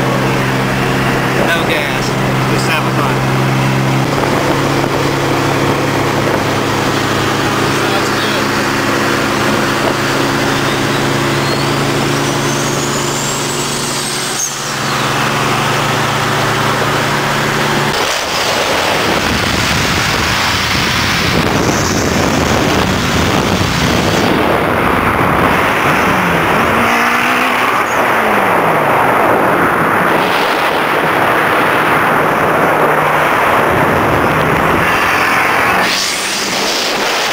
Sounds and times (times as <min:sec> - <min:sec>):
Race car, auto racing: 0:00.0 - 0:37.3.